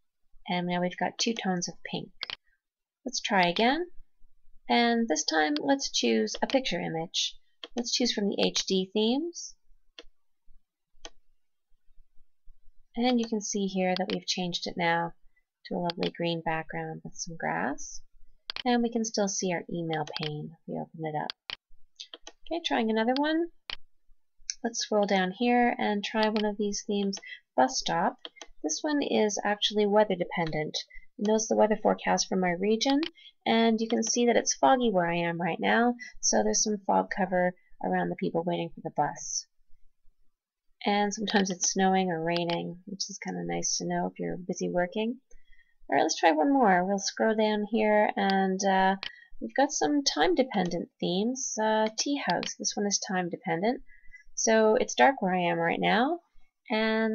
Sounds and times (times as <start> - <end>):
Speech: 0.5 - 2.4, 3.1 - 4.0, 4.7 - 9.6, 13.0 - 21.4, 22.5 - 23.6, 24.5 - 39.5, 40.8 - 45.2, 45.9 - 53.8, 54.4 - 57.1.